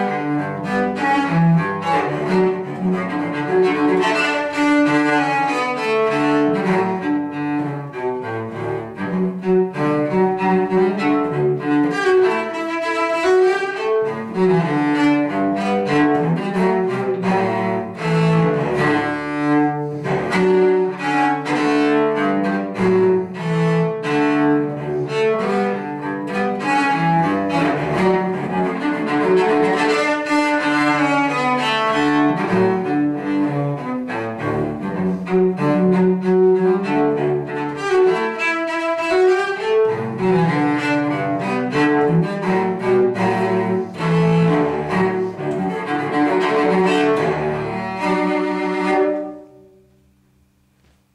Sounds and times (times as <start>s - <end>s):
Cello: 0.0s - 51.1s.